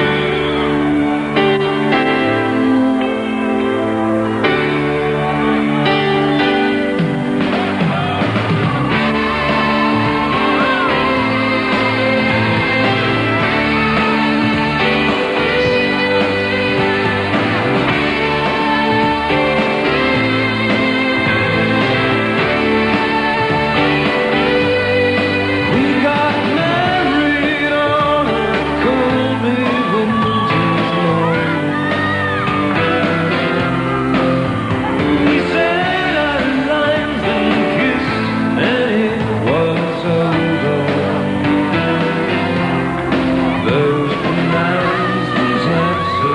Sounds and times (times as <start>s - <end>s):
Music: 0.0s - 46.3s.